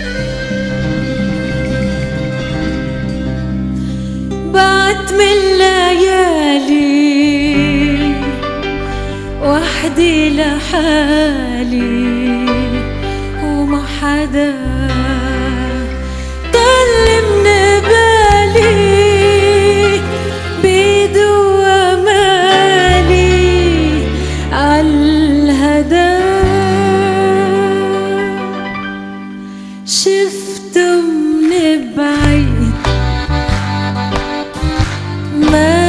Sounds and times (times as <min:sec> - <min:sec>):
Music: 0:00.0 - 0:35.8
Female singing: 0:04.5 - 0:08.3, 0:09.4 - 0:12.8, 0:13.4 - 0:15.9, 0:16.5 - 0:20.0, 0:20.6 - 0:28.6, 0:29.9 - 0:32.8, 0:35.4 - 0:35.8.